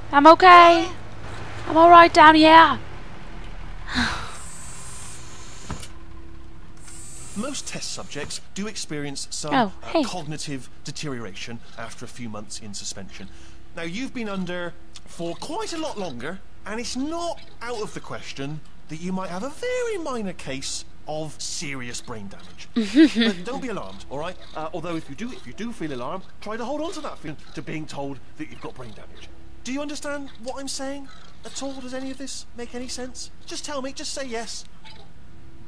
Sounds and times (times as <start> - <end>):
Speech: 0.1 - 1.0, 1.7 - 2.8, 7.4 - 34.7.